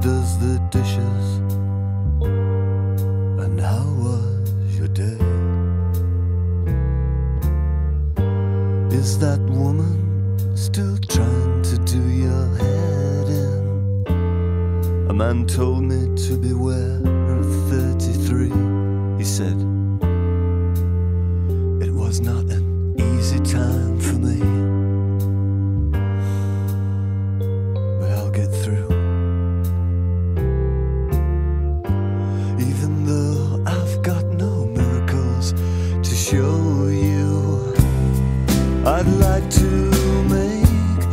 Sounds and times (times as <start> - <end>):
Music: 0.0 - 41.1
Speech: 15.1 - 18.6, 19.2 - 19.7, 21.8 - 24.6, 28.0 - 28.9.